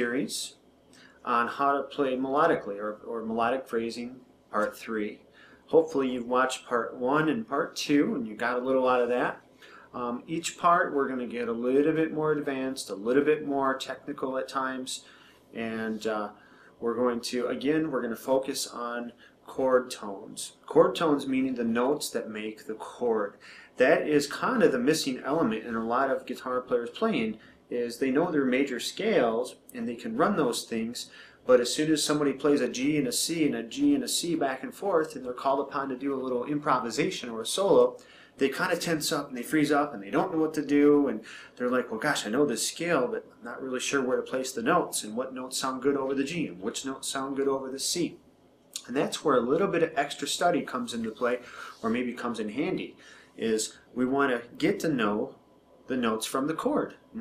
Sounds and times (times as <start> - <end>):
Speech: 0.0 - 48.2, 48.8 - 57.2.